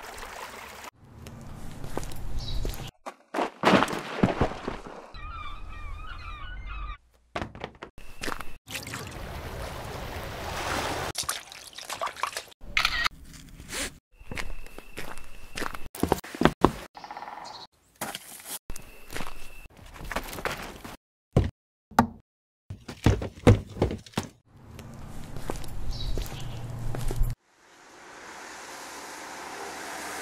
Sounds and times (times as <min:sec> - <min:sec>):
Outside, rural or natural: 0:00.0 - 0:30.2
Walk, footsteps: 0:14.3 - 0:16.8, 0:22.9 - 0:27.4.